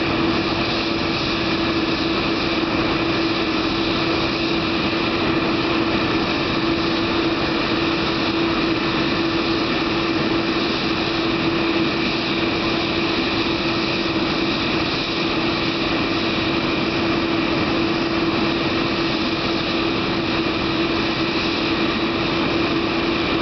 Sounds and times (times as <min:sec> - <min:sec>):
Aircraft: 0:00.0 - 0:23.4
Heavy engine (low frequency): 0:00.0 - 0:23.4.